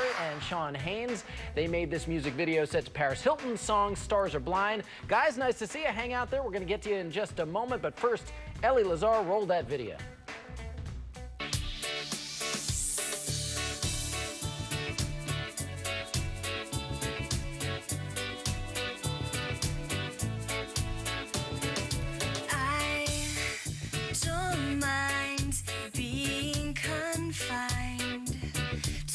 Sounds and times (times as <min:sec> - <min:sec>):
Music: 0:00.0 - 0:29.1.